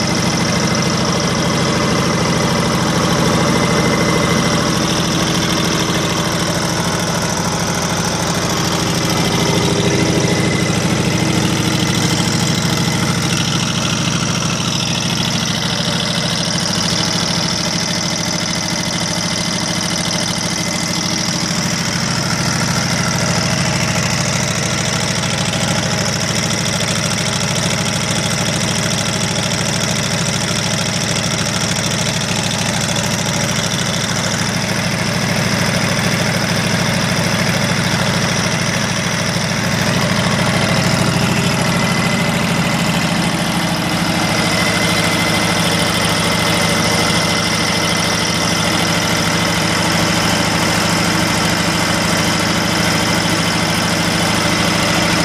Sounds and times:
Heavy engine (low frequency): 0:00.0 - 0:55.2.

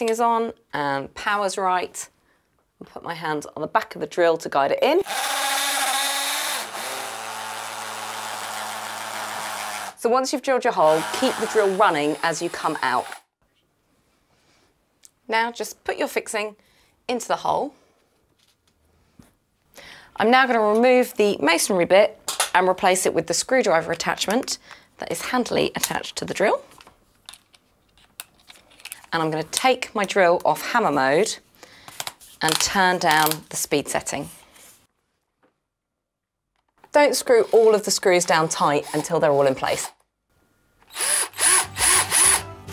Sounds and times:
Speech: 0:00.0 - 0:02.1, 0:02.8 - 0:05.1, 0:10.0 - 0:13.1, 0:15.3 - 0:17.7, 0:20.2 - 0:26.7, 0:29.1 - 0:31.4, 0:32.4 - 0:34.3, 0:36.9 - 0:39.9.

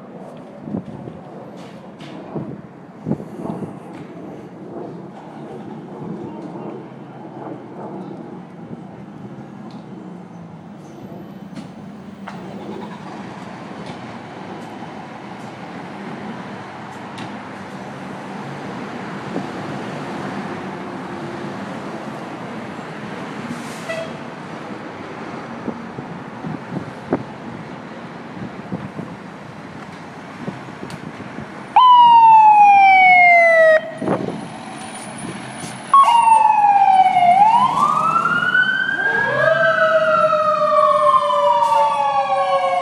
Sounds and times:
Vehicle: 0:00.0 - 0:42.8.

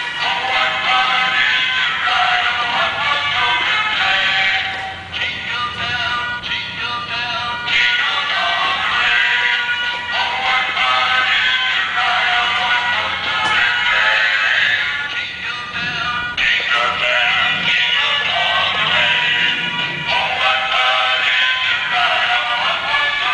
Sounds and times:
Music: 0:00.0 - 0:23.3.

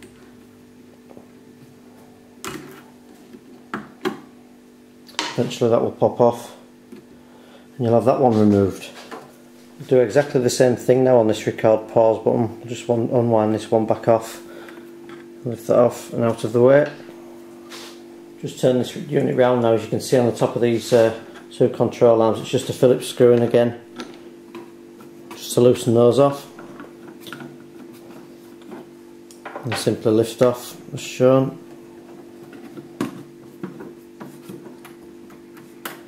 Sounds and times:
Speech: 0:05.2 - 0:06.7, 0:07.8 - 0:09.1, 0:09.8 - 0:14.5, 0:15.4 - 0:17.0, 0:18.4 - 0:23.9, 0:25.3 - 0:26.6, 0:29.6 - 0:31.6.

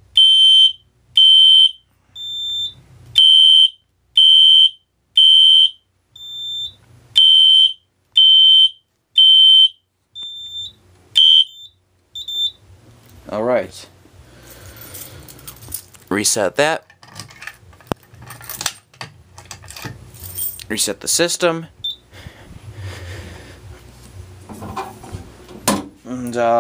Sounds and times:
Beep, bleep: 0:00.2 - 0:12.6, 0:21.8 - 0:22.0
Fire alarm: 0:00.2 - 0:12.6
Smoke detector, smoke alarm: 0:00.2 - 0:12.6.

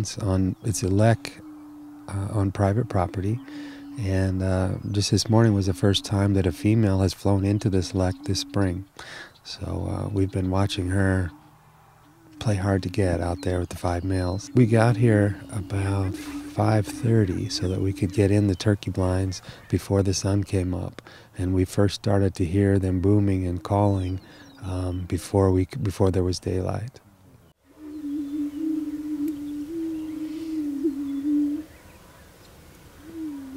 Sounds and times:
Speech: 0:00.0 - 0:01.4, 0:02.1 - 0:03.4, 0:04.0 - 0:08.9, 0:09.5 - 0:11.3, 0:12.4 - 0:27.0.

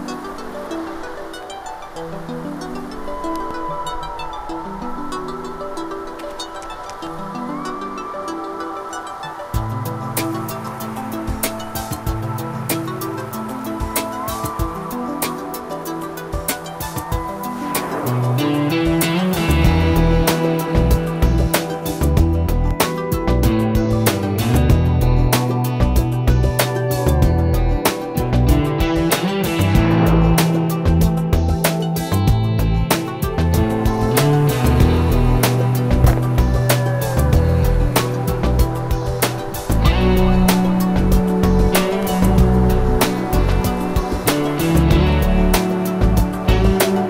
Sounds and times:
Music: 0:00.0 - 0:47.0.

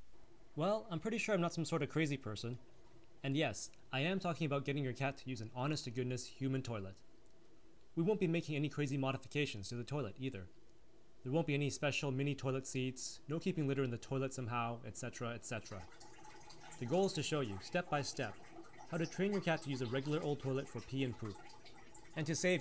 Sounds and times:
Speech: 0:00.6 - 0:02.6, 0:03.2 - 0:07.0, 0:08.0 - 0:10.5, 0:11.2 - 0:15.9, 0:16.8 - 0:21.4, 0:22.2 - 0:22.6.

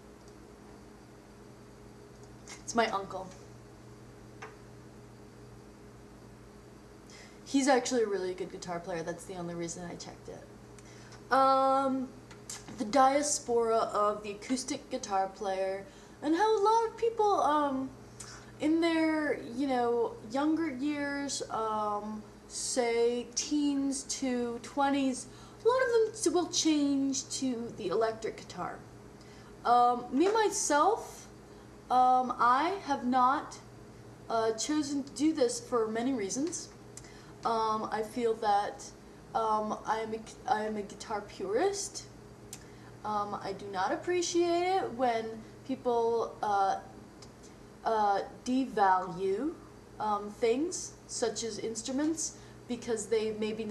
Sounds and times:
Speech: 0:02.5 - 0:03.4, 0:07.5 - 0:10.5, 0:11.3 - 0:18.0, 0:18.6 - 0:28.9, 0:29.6 - 0:31.3, 0:31.9 - 0:33.7, 0:34.3 - 0:36.8, 0:37.4 - 0:42.1, 0:43.0 - 0:46.9, 0:47.8 - 0:53.7.

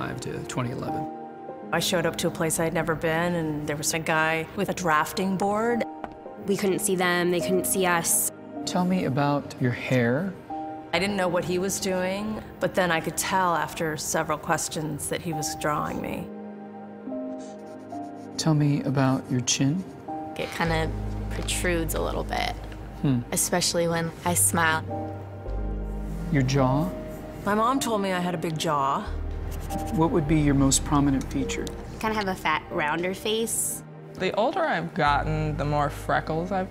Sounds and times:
Music: 0:00.0 - 0:36.7.

